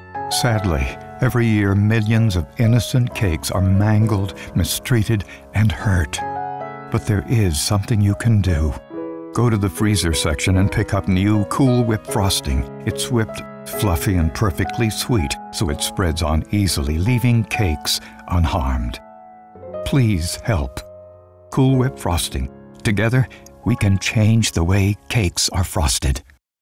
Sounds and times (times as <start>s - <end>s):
Music: 0.0s - 26.4s
Speech: 0.3s - 6.2s, 6.9s - 8.8s, 9.4s - 19.0s, 19.8s - 20.9s, 21.5s - 26.4s.